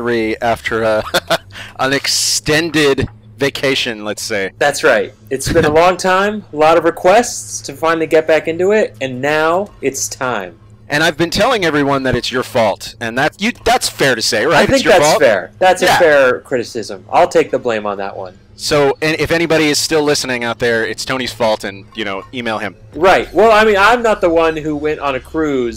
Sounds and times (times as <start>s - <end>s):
Speech: 0.0s - 1.0s, 1.8s - 25.7s.